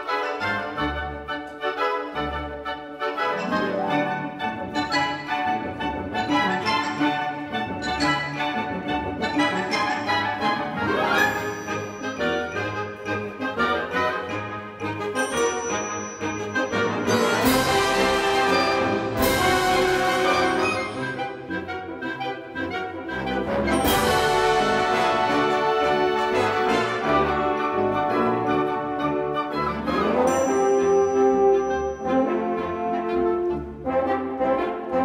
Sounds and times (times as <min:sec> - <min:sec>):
Music: 0:00.0 - 0:35.0.